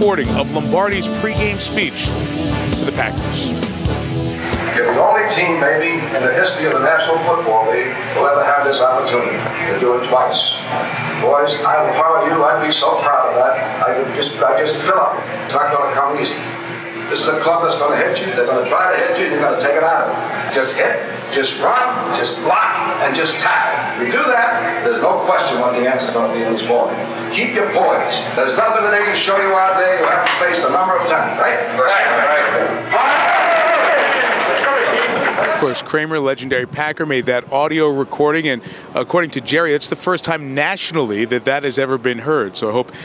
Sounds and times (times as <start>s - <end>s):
Male speech, man speaking: 0.0s - 2.1s, 2.7s - 3.6s, 4.7s - 16.4s, 17.1s - 32.8s, 35.4s - 42.9s
Narration, monologue: 0.0s - 3.8s, 4.7s - 32.9s, 35.6s - 43.0s.